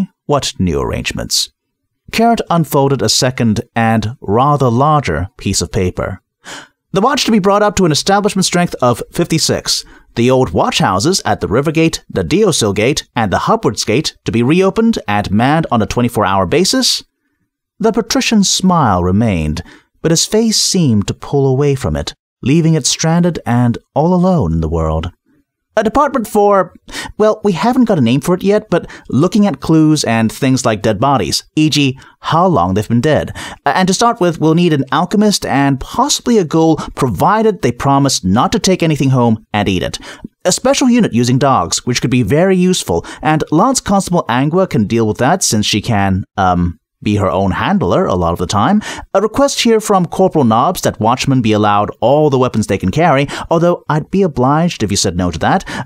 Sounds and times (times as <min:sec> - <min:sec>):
Speech synthesizer: 0:00.0 - 0:01.5, 0:02.1 - 0:06.2, 0:07.0 - 0:17.0, 0:17.8 - 0:25.1, 0:25.8 - 0:55.6
Narration, monologue: 0:00.0 - 0:55.8.